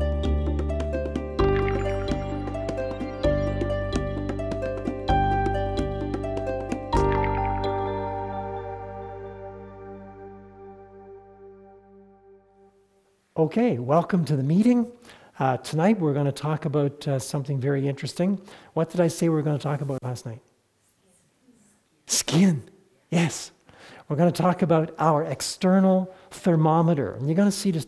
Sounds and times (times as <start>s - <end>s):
Speech: 13.4s - 20.5s, 21.5s - 27.8s.